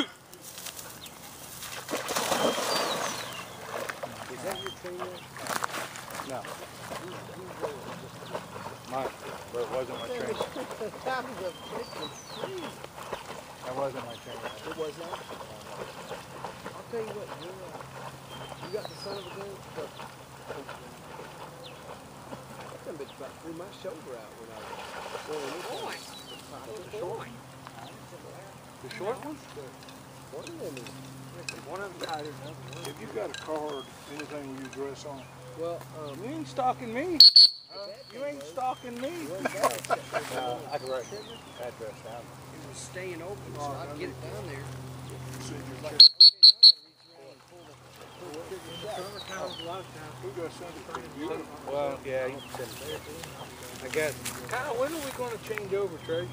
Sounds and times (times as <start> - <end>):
Animal: 0.0 - 23.2
Outside, rural or natural: 0.0 - 56.3.